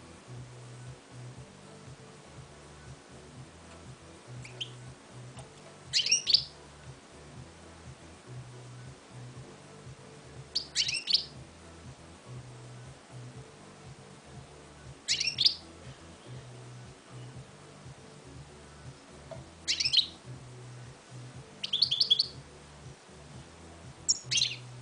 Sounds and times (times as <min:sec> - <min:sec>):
Music: 0:00.0 - 0:24.8.